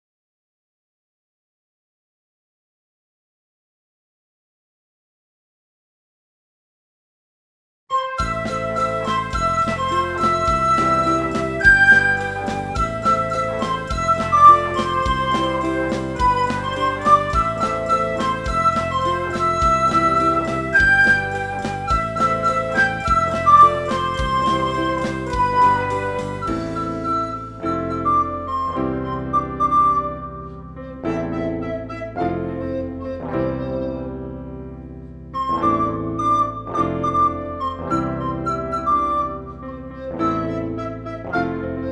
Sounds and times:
Flute: 7.9 - 41.9
Happy music: 7.9 - 41.9
Independent music: 7.9 - 41.9.

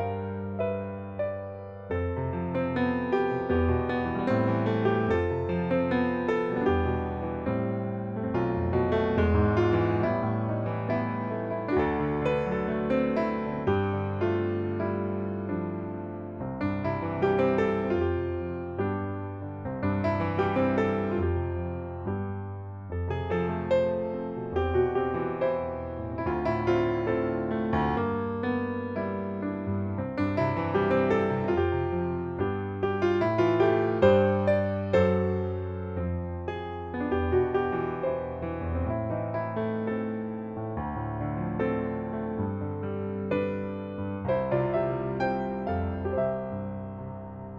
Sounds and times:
Electric piano: 0.0 - 47.5.

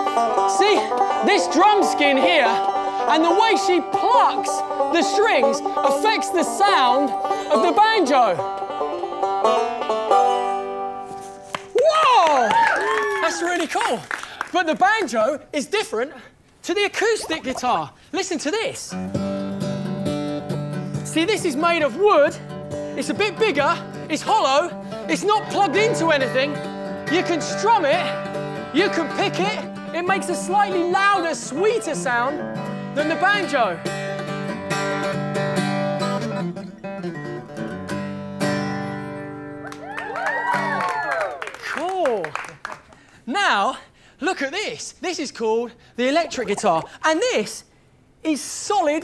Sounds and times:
Music: 0.0 - 11.8, 18.9 - 40.9
Speech: 13.2 - 19.0, 21.1 - 22.4, 23.0 - 28.1, 28.8 - 32.4, 33.0 - 33.8, 41.6 - 42.4, 43.3 - 49.0.

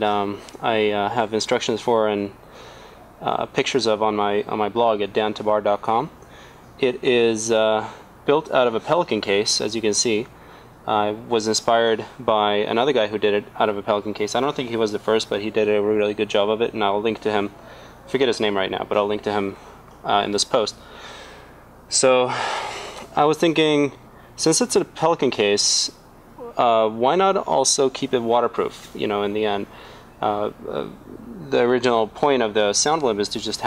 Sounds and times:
Speech: 0.0 - 2.4, 3.2 - 6.2, 6.8 - 10.3, 10.9 - 20.8, 21.9 - 22.4, 23.1 - 33.6.

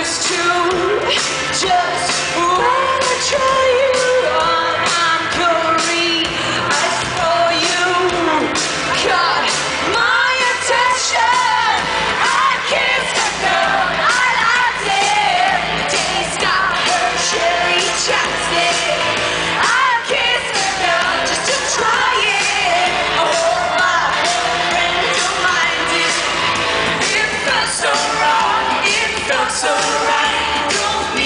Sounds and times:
Exciting music: 0.5 - 31.2.

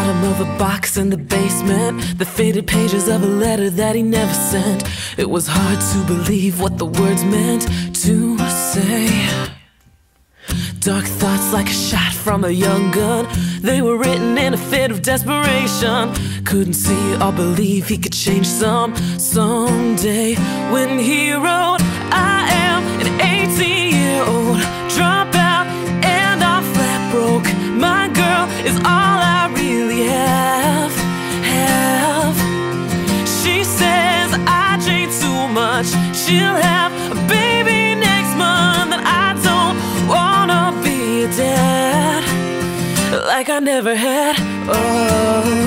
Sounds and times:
Rhythm and blues: 12.2 - 43.0.

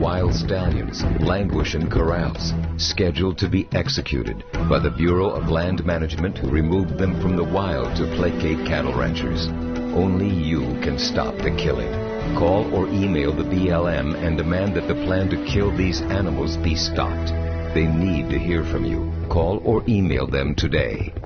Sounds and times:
Music: 0.0 - 21.2
Speech: 0.0 - 21.2.

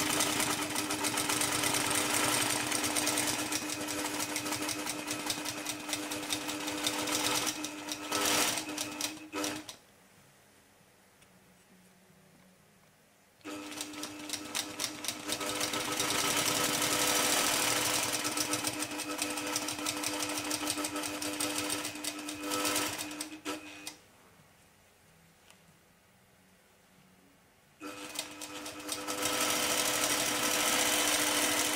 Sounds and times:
Sewing machine: 0.0 - 9.8, 13.5 - 24.0, 27.8 - 31.7.

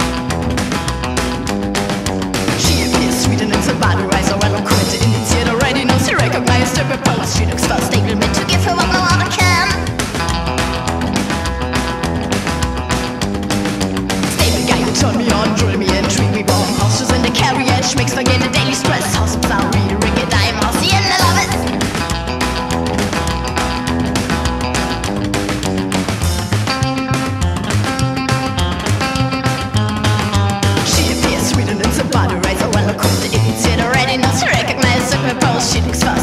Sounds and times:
Music: 0.0 - 36.2.

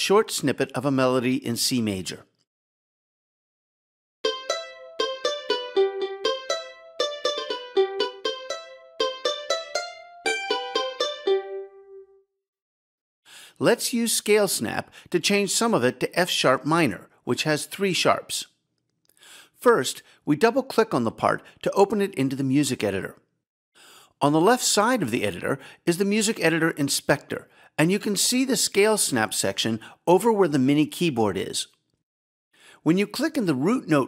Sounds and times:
Speech: 0.0 - 2.4, 13.6 - 18.6, 19.6 - 23.2, 24.2 - 31.8, 32.8 - 34.0.

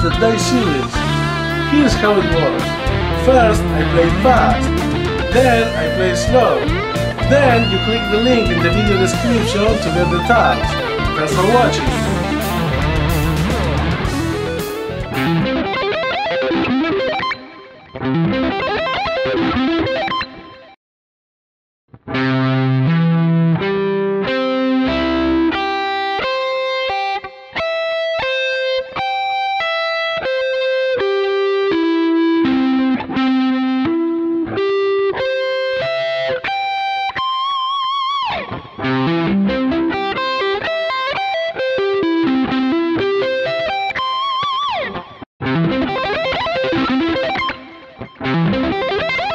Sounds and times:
Speech: 0.0 - 1.0, 1.7 - 12.4
Electric guitar: 0.0 - 20.7, 22.0 - 49.3.

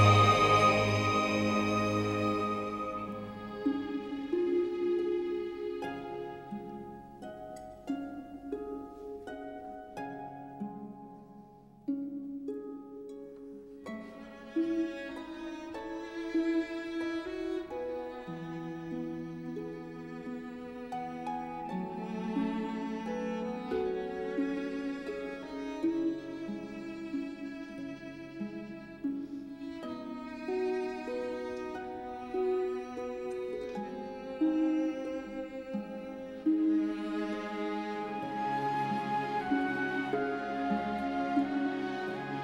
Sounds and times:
Cello: 0.0 - 42.4.

